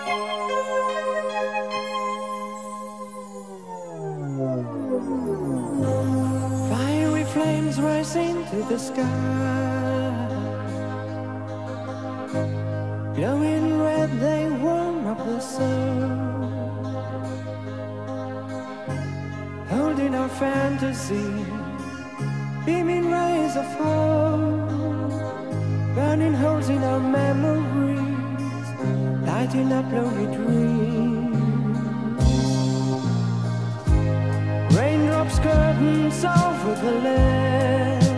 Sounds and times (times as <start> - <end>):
Music: 0.0 - 38.1.